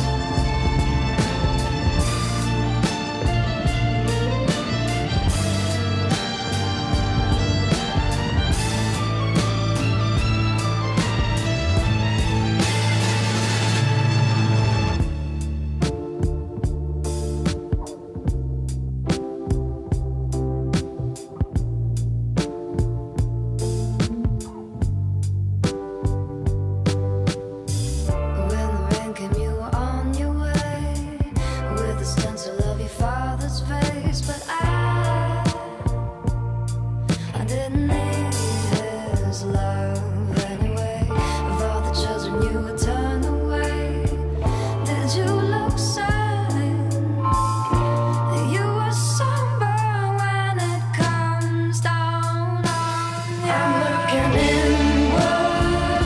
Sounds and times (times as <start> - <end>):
Music: 0.0 - 56.0.